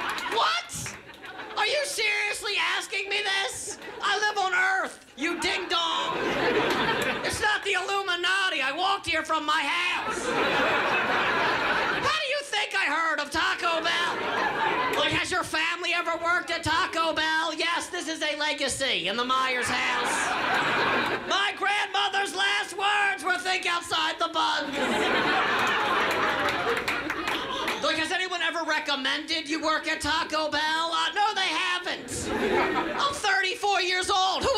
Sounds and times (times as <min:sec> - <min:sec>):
Speech: 0:01.6 - 0:06.3, 0:07.2 - 0:10.3, 0:12.0 - 0:14.2, 0:15.0 - 0:20.4, 0:21.3 - 0:24.8, 0:27.8 - 0:32.3, 0:33.0 - 0:34.5.